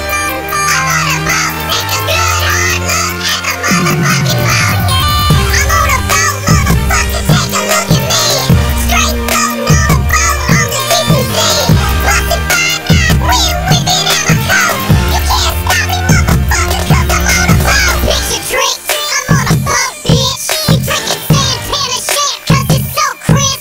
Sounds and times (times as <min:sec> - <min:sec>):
Music: 0:00.0 - 0:23.6.